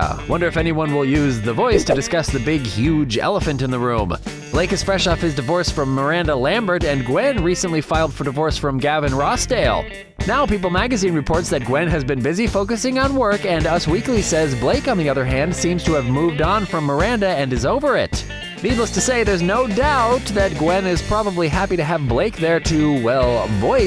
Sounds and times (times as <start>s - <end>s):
Music: 0.0s - 23.8s
Speech: 0.0s - 23.8s.